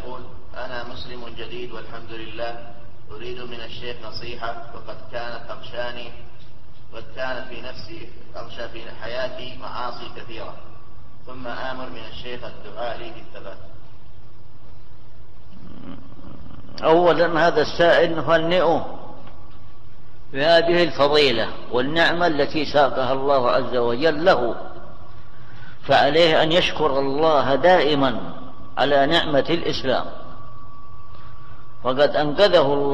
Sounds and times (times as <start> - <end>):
Speech: 0.0 - 6.3, 6.9 - 10.7, 11.3 - 13.8, 16.8 - 19.1, 20.3 - 24.9, 25.9 - 30.2, 31.8 - 32.9.